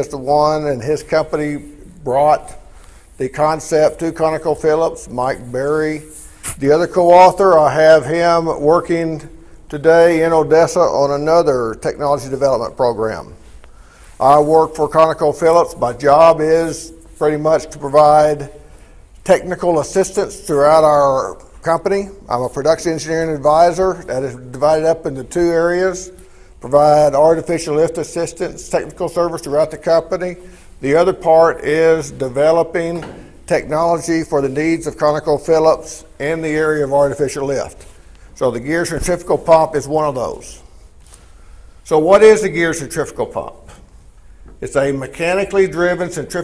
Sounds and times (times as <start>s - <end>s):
Speech: 0.0s - 2.6s, 3.2s - 13.4s, 14.2s - 18.6s, 19.2s - 37.8s, 38.4s - 40.7s, 41.8s - 43.8s, 44.6s - 46.4s.